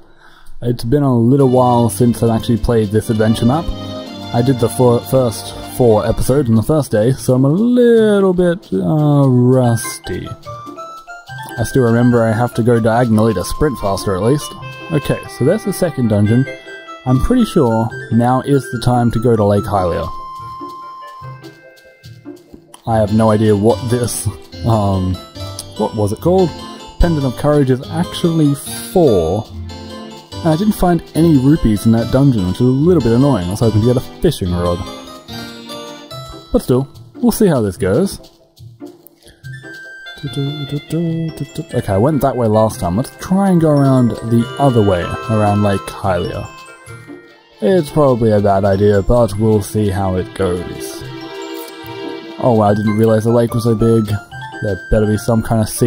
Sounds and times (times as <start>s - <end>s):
Music: 0.0s - 55.8s
Speech: 0.6s - 3.7s, 4.3s - 10.4s, 11.5s - 20.2s, 22.8s - 29.5s, 30.4s - 34.9s, 36.5s - 38.2s, 40.2s - 46.6s, 47.6s - 51.1s, 52.4s - 55.8s.